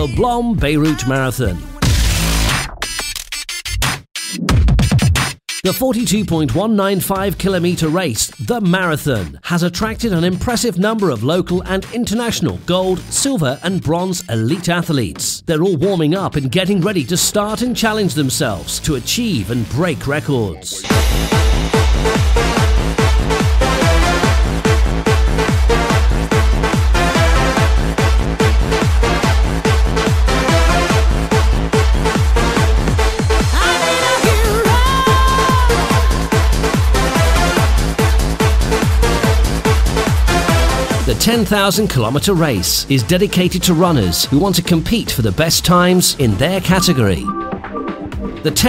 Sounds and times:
Speech: 0.0 - 1.8, 5.7 - 20.9, 33.5 - 36.0, 41.1 - 47.3, 48.4 - 48.6
Music: 0.0 - 48.6.

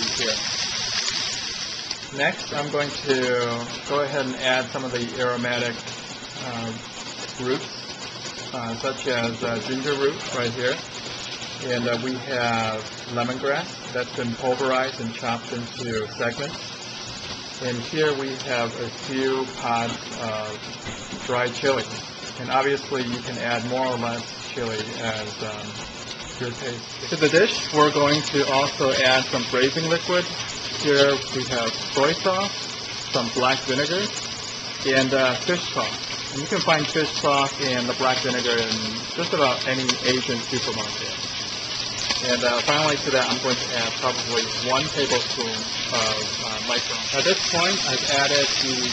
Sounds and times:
Speech: 0.0 - 0.5, 2.1 - 5.8, 6.4 - 7.8, 8.5 - 10.8, 11.6 - 16.6, 17.6 - 20.6, 21.2 - 25.8, 26.4 - 32.6, 33.2 - 34.2, 34.8 - 41.2, 42.2 - 48.9.

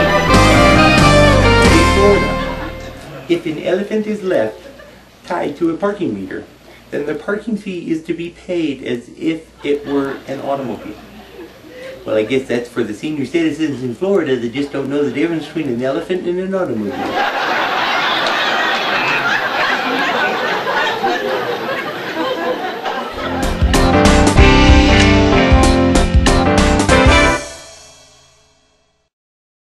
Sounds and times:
Music: 0.0 - 3.1, 23.1 - 29.1.

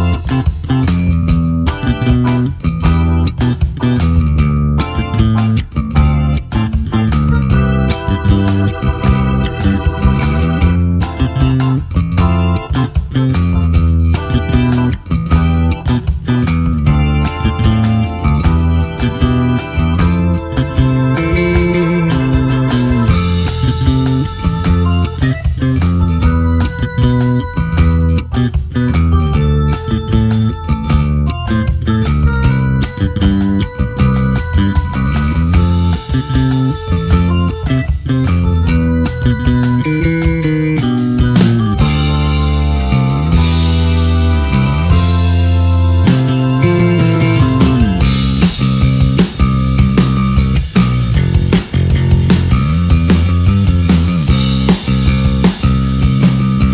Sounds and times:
Electric guitar: 0.0 - 56.7.

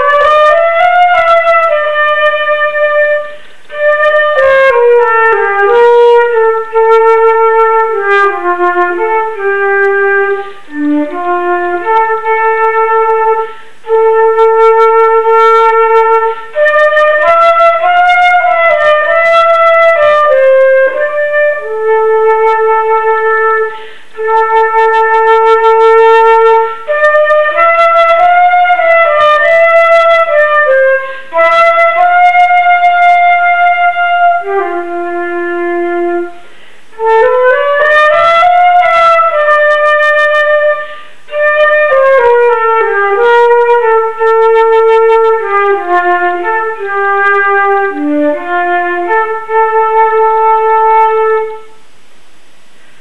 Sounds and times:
Flute: 0.0 - 51.8.

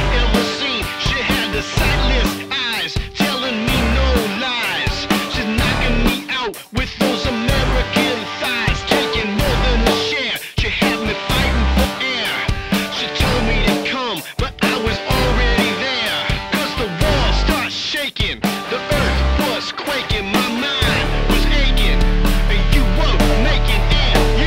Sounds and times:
Music: 0.0 - 24.4.

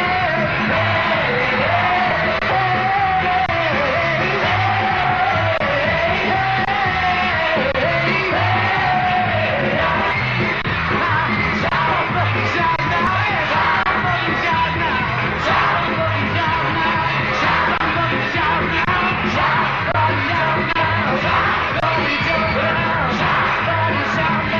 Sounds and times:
Rock and roll: 0.0 - 24.6
Shout: 0.0 - 24.6.

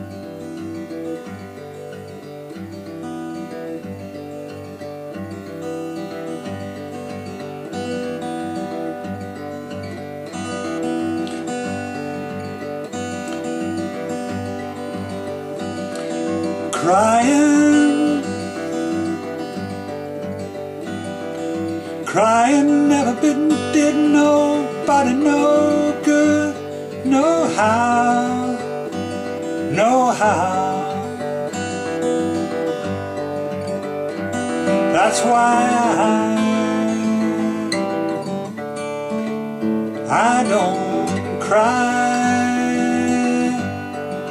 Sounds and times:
Music: 0.0 - 44.3.

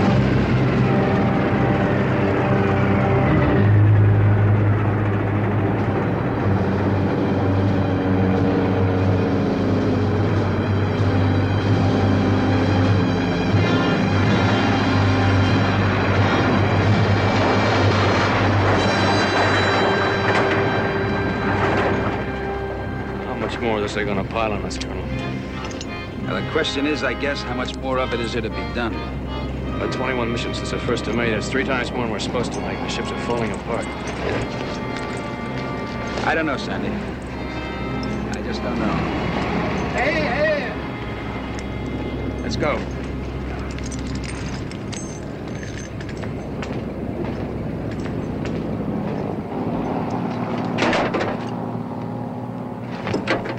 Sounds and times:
Music: 0.0 - 50.7.

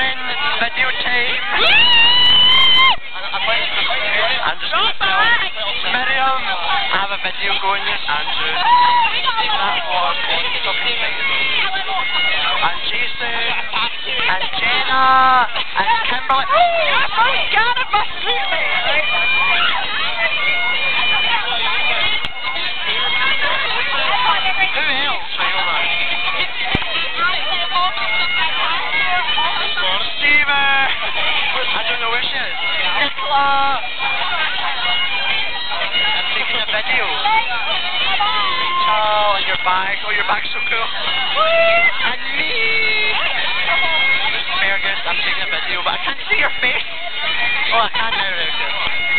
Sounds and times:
Music: 0.0 - 49.1
Speech: 2.9 - 49.1.

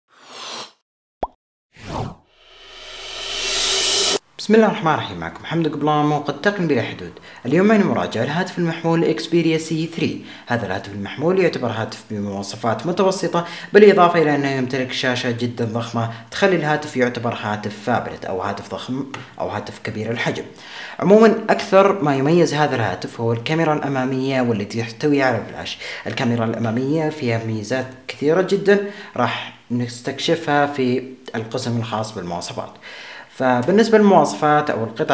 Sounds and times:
Speech: 4.4 - 35.1.

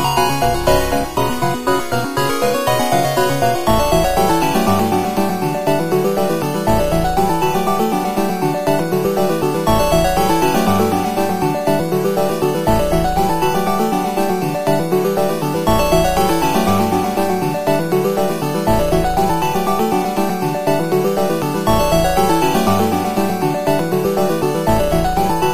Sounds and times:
Electronic music: 0.0 - 25.5
Video game music: 0.0 - 25.5.

